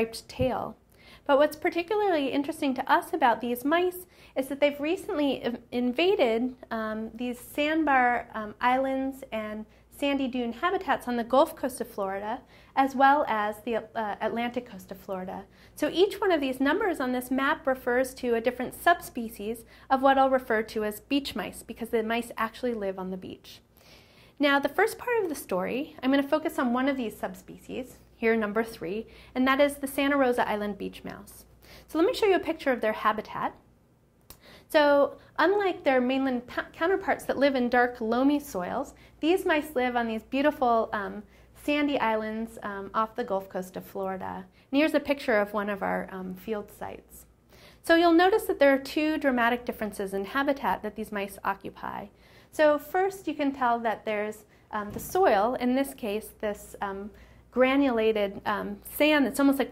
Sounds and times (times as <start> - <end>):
Speech: 0.0 - 23.6, 24.4 - 33.6, 34.7 - 59.7.